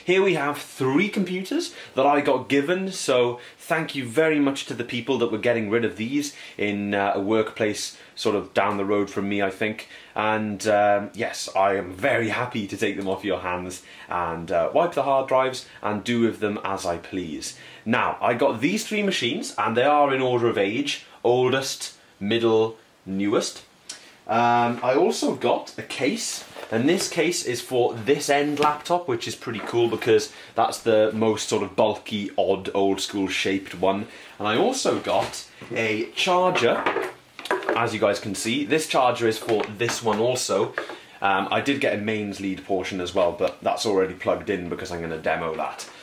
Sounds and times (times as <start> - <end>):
Speech: 0.0 - 23.7, 24.3 - 46.0
Inside, small room: 0.0 - 46.0.